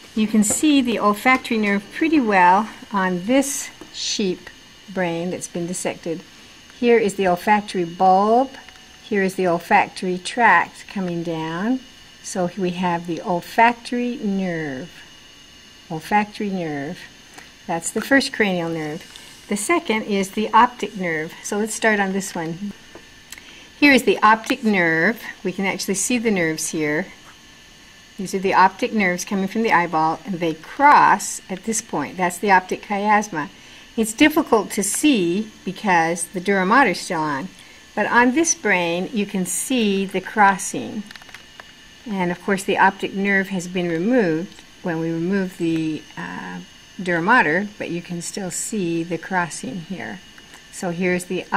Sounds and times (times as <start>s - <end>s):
Speech: 0.2s - 15.0s, 15.9s - 17.1s, 17.7s - 22.8s, 23.8s - 27.2s, 28.2s - 41.1s, 42.0s - 51.5s.